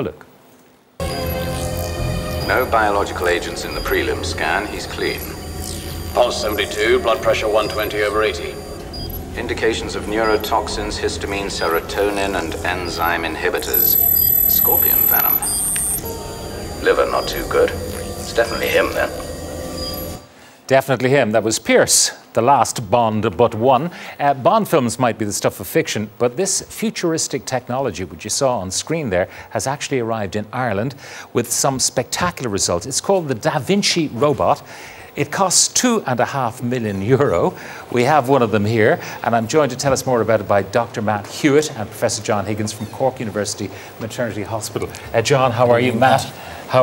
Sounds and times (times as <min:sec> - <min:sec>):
Speech: 0:00.0 - 0:00.3, 0:02.5 - 0:05.3, 0:06.2 - 0:08.6, 0:09.4 - 0:15.5, 0:16.8 - 0:19.2, 0:20.7 - 0:46.8.